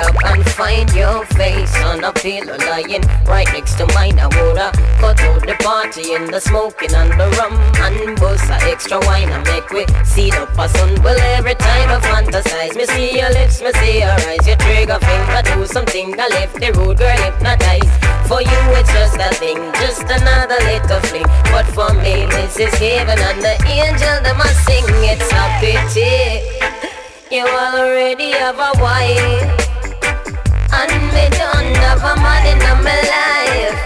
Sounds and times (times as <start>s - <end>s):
Reggae: 0.0s - 33.8s.